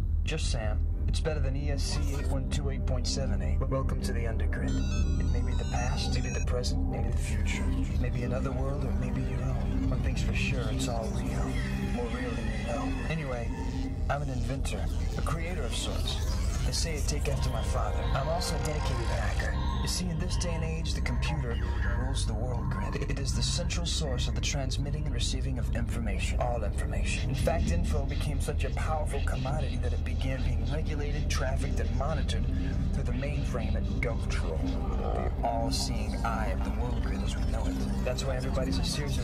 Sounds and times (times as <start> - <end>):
Music: 0.0 - 39.2
Speech: 0.2 - 39.2.